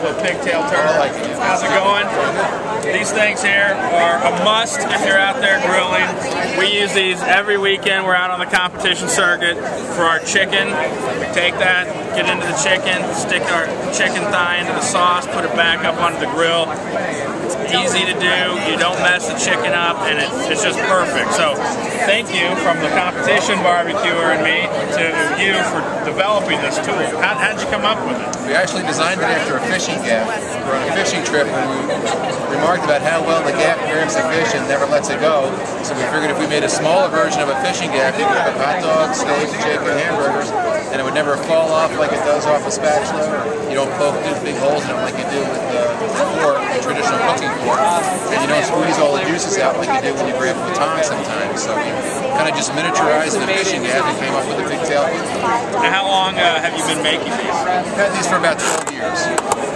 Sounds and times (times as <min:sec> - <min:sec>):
Speech: 0:00.0 - 0:59.5.